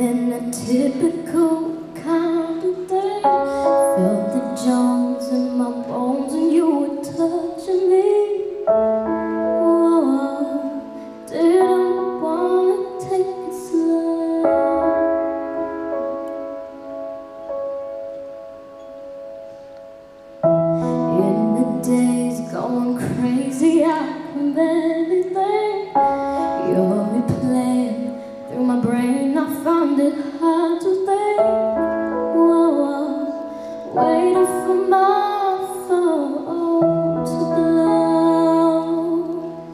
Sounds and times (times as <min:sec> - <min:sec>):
Female singing: 0:00.0 - 0:08.6, 0:09.6 - 0:15.0, 0:21.1 - 0:26.0, 0:26.6 - 0:39.7
Music: 0:00.0 - 0:39.7.